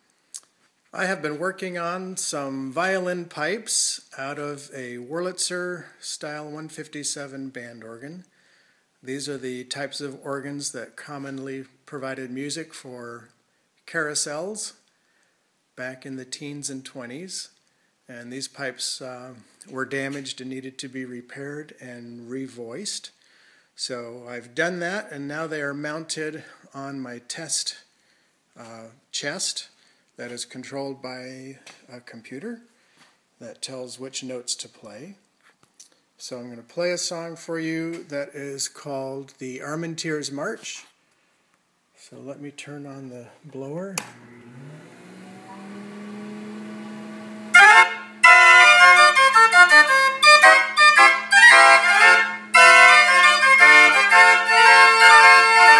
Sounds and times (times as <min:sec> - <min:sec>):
Speech: 0:01.0 - 0:08.3, 0:09.0 - 0:14.8, 0:15.8 - 0:23.2, 0:23.8 - 0:27.9, 0:28.6 - 0:32.7, 0:33.4 - 0:35.2, 0:36.2 - 0:40.9, 0:42.0 - 0:44.1.